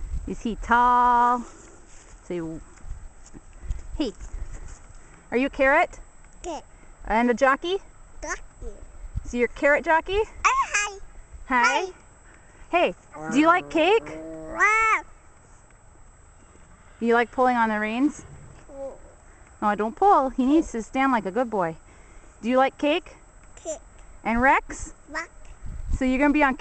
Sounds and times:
Outside, rural or natural: 0:00.0 - 0:26.6
Child speech, kid speaking: 0:06.4 - 0:06.7, 0:08.2 - 0:08.9, 0:10.4 - 0:12.0, 0:13.2 - 0:15.1, 0:18.7 - 0:19.2, 0:23.6 - 0:23.9, 0:25.0 - 0:25.4.

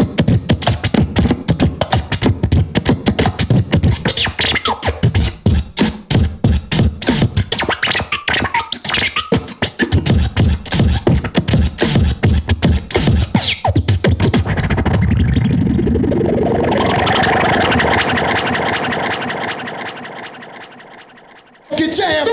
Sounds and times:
Scratching (performance technique): 0:00.0 - 0:22.3
Electronic music: 0:14.2 - 0:22.1.

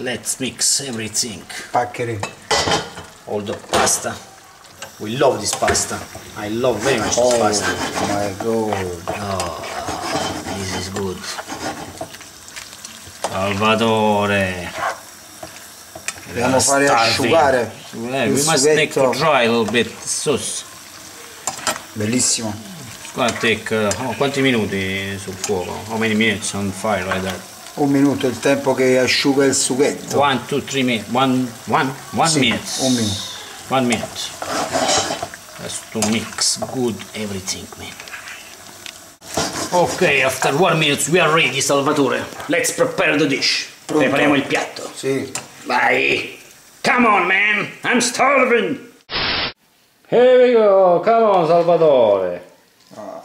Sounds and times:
Frying (food): 0:00.0 - 0:53.2.

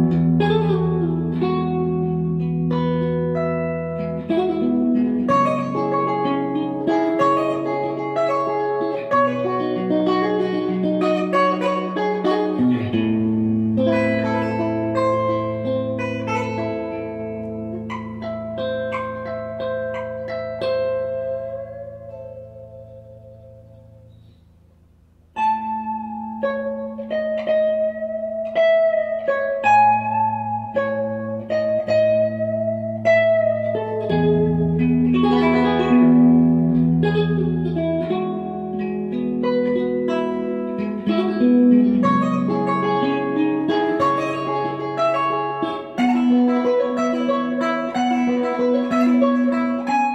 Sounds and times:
Electric guitar: 0:00.0 - 0:24.3, 0:25.4 - 0:50.1.

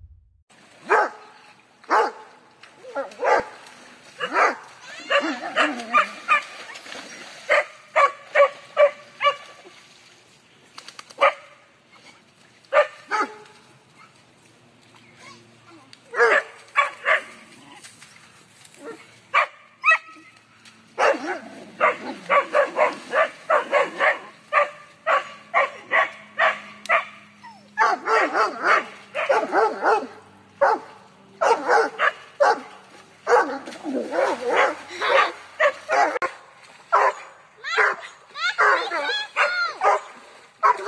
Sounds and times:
Bow-wow: 0:00.9 - 0:01.2, 0:01.9 - 0:02.2, 0:02.9 - 0:03.6, 0:04.2 - 0:06.5, 0:07.5 - 0:09.5, 0:16.2 - 0:17.4, 0:21.0 - 0:27.2, 0:27.8 - 0:30.8, 0:33.3 - 0:40.8
Speech: 0:37.6 - 0:39.9.

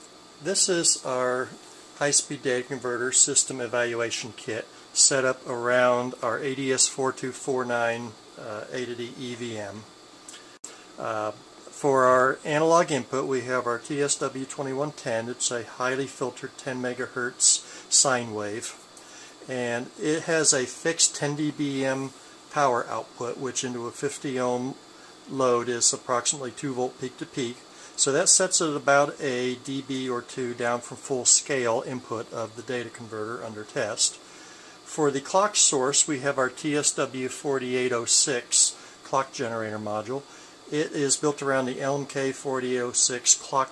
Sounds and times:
Speech: 0:00.4 - 0:09.9, 0:11.0 - 0:34.3, 0:34.9 - 0:43.7.

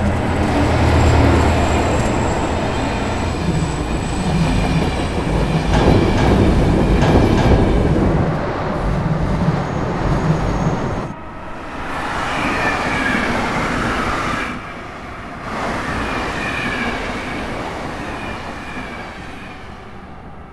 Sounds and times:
Railroad car, train wagon: 0:00.0 - 0:20.5
Subway, metro, underground: 0:00.0 - 0:20.5
Train: 0:00.0 - 0:20.5.

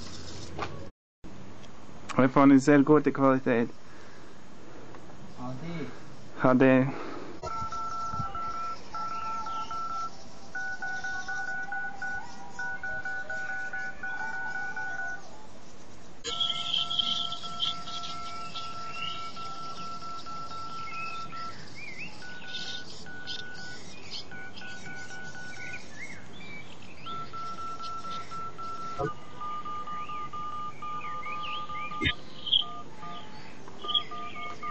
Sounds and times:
Telephone dialing, DTMF: 0:07.4 - 0:15.2, 0:16.3 - 0:21.6, 0:22.2 - 0:25.8, 0:27.1 - 0:34.7.

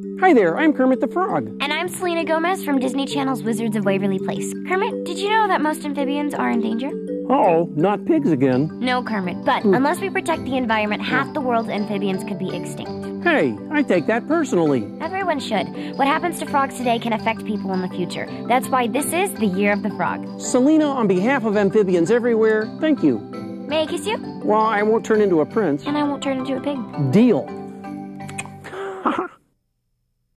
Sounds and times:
Music: 0:00.0 - 0:28.8.

